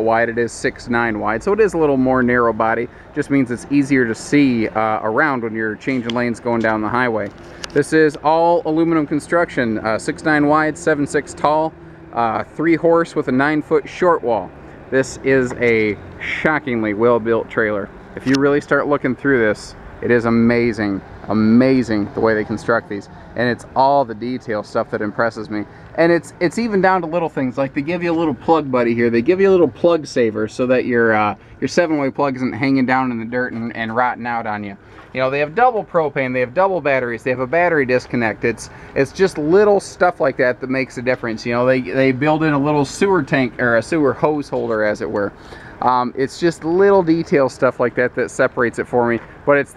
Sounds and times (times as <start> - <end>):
Speech: 0.0 - 49.7.